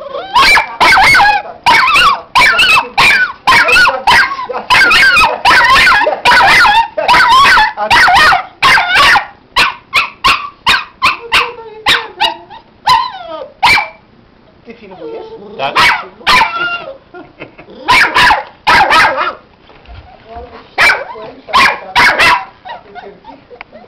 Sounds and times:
Whimper (dog): 0.0 - 7.8, 11.1 - 13.6, 14.9 - 15.7, 16.4 - 17.0, 22.7 - 23.8
Bow-wow: 0.2 - 14.0, 15.6 - 16.9, 17.8 - 19.4, 20.8 - 22.8
Yip: 0.2 - 14.0, 15.8 - 17.0, 17.8 - 19.4, 20.8 - 23.1
Bark: 0.3 - 14.0, 15.8 - 16.8, 17.9 - 19.4, 20.8 - 22.8.

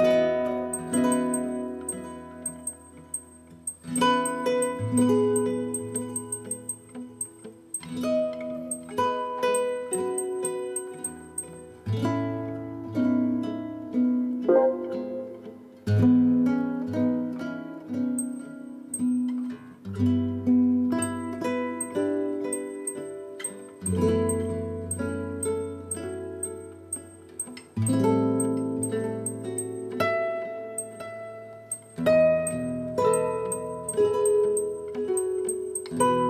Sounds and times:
Music: 0.0 - 36.3.

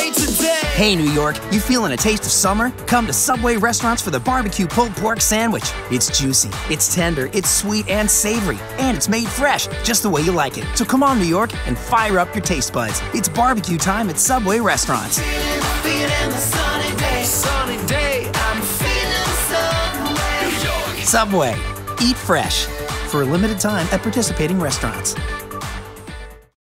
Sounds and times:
Music: 0.0 - 26.6
Speech: 0.6 - 15.2, 21.0 - 25.2.

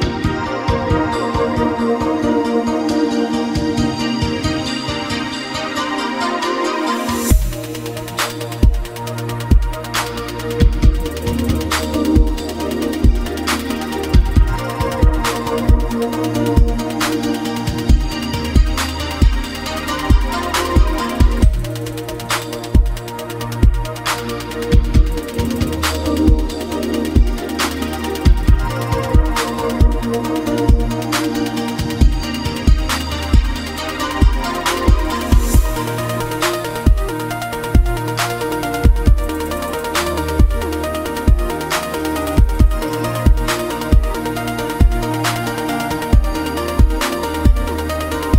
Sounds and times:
Electronica: 0.0 - 48.3.

